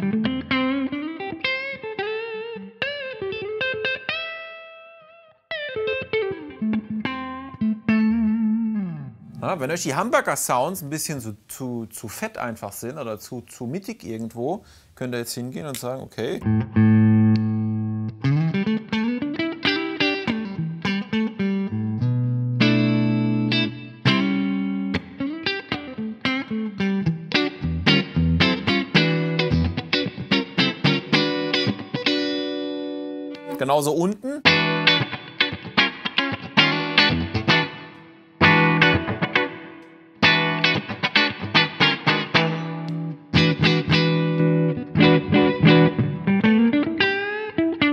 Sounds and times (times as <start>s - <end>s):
Electric guitar: 0.0s - 9.4s, 16.4s - 33.6s, 34.4s - 47.9s.